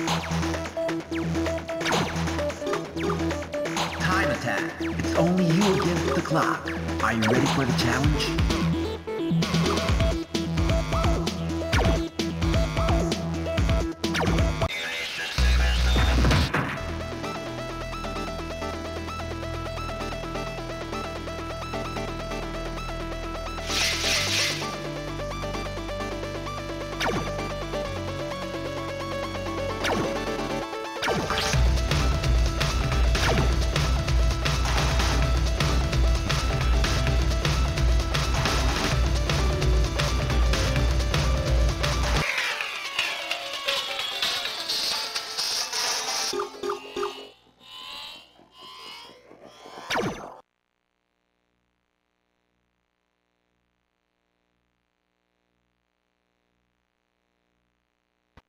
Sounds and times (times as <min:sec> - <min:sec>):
Music: 0:00.0 - 0:47.6.